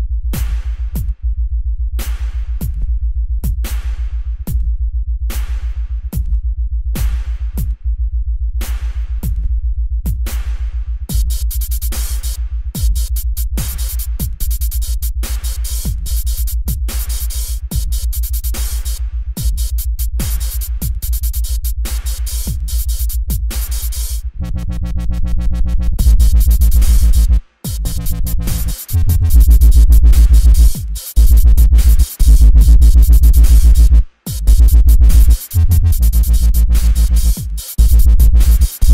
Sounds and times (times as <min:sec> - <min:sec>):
Dubstep: 0:11.1 - 0:38.9.